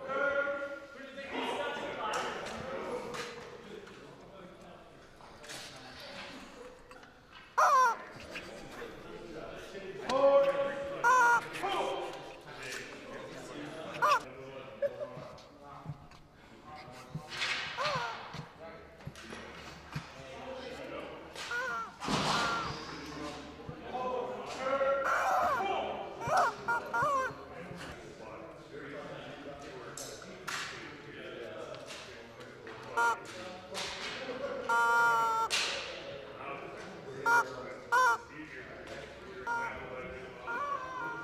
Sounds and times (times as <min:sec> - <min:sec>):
Speech: 0:00.0 - 0:07.0, 0:07.9 - 0:41.2.